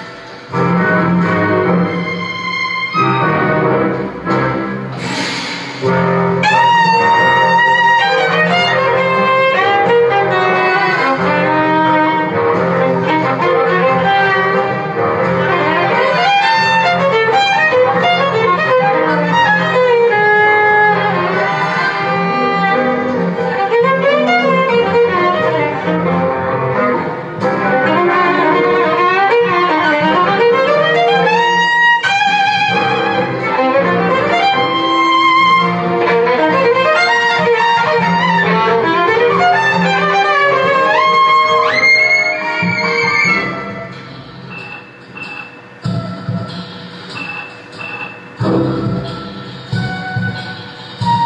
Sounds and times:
Violin, fiddle: 1.7 - 3.8, 6.4 - 26.2.

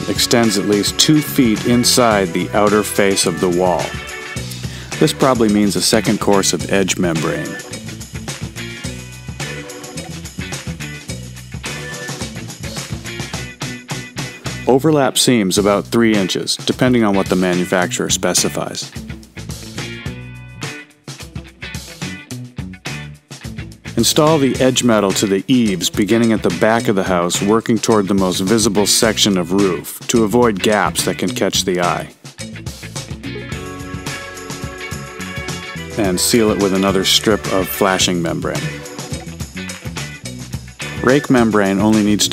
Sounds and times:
Speech: 0.0 - 4.0, 4.9 - 7.7, 14.6 - 19.0, 24.0 - 32.2, 36.0 - 38.8, 41.0 - 42.3
Music: 0.0 - 42.3.

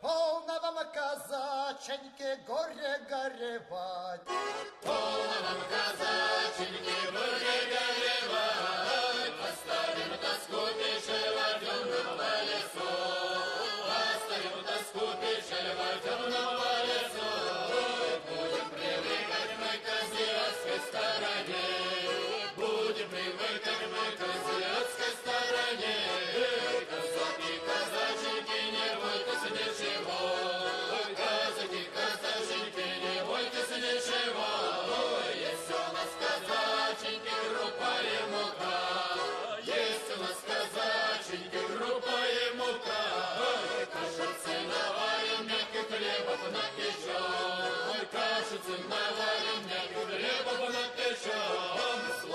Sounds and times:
Music: 4.3 - 52.3.

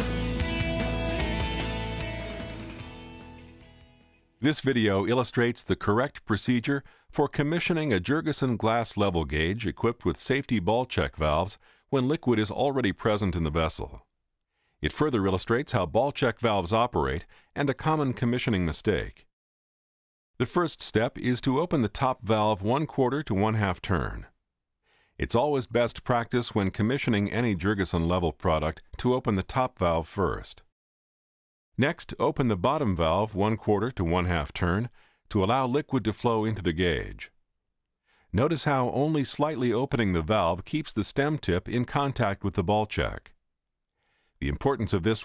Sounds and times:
Speech: 4.4 - 14.1, 14.8 - 19.3, 20.4 - 24.3, 25.2 - 30.7, 31.8 - 37.3, 38.4 - 43.4, 44.4 - 45.2.

